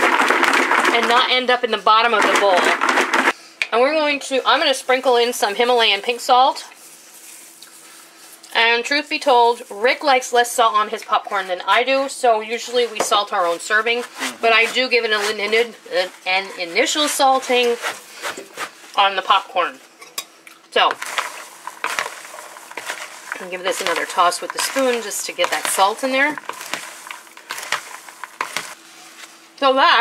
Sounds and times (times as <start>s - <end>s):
Speech: 0.9s - 2.8s, 3.7s - 6.7s, 8.5s - 17.8s, 19.0s - 19.8s, 20.8s - 21.0s, 23.4s - 26.4s, 29.6s - 30.0s.